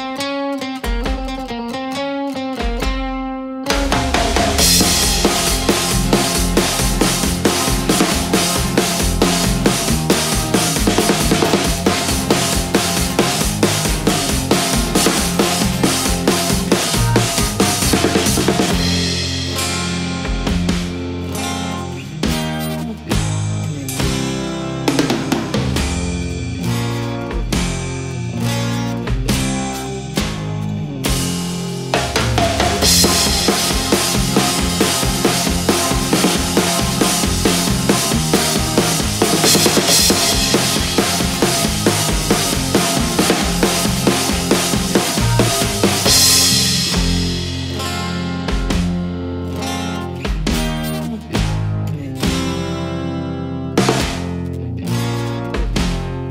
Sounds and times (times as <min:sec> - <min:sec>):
Music: 0:00.0 - 0:56.3.